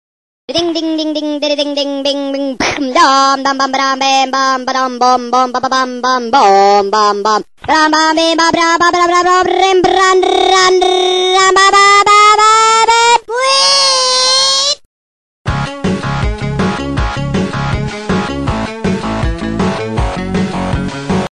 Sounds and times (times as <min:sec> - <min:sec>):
Music: 0:15.5 - 0:21.3.